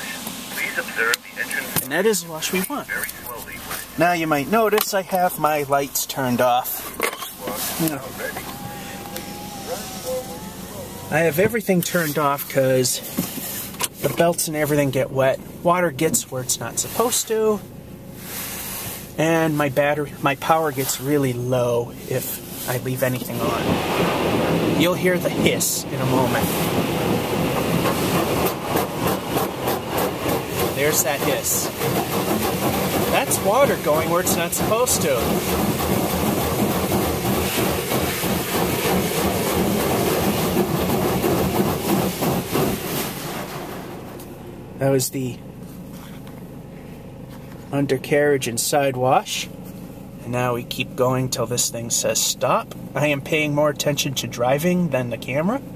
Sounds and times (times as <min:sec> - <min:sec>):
Speech: 0:00.0 - 0:13.1, 0:14.0 - 0:17.7, 0:19.2 - 0:23.8, 0:24.8 - 0:26.6, 0:30.8 - 0:31.8, 0:33.1 - 0:35.4, 0:44.8 - 0:45.4, 0:47.7 - 0:49.6, 0:50.2 - 0:55.7.